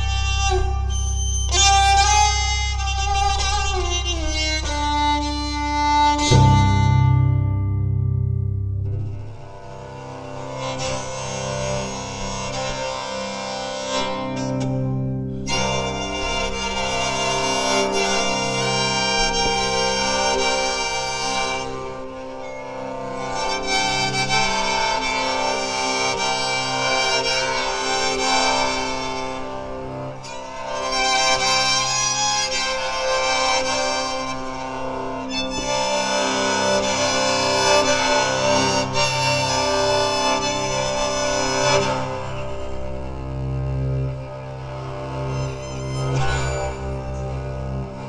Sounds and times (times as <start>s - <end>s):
Banjo: 0.0s - 48.0s
Bowed string instrument: 0.0s - 48.0s.